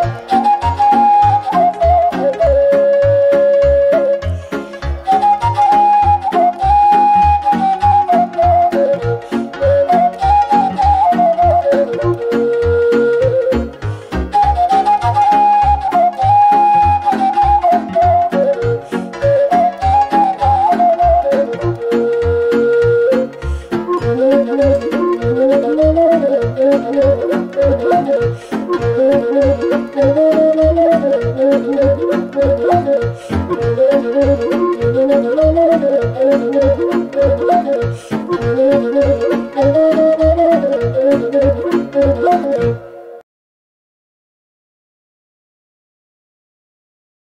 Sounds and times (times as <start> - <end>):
Wind instrument, woodwind instrument: 0.0 - 43.2.